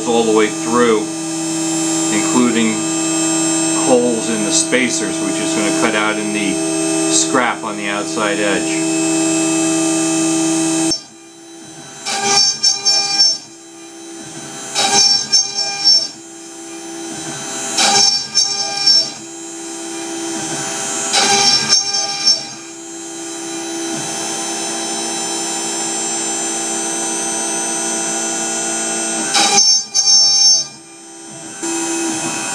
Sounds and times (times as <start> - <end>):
Electric toothbrush: 0.0 - 32.5.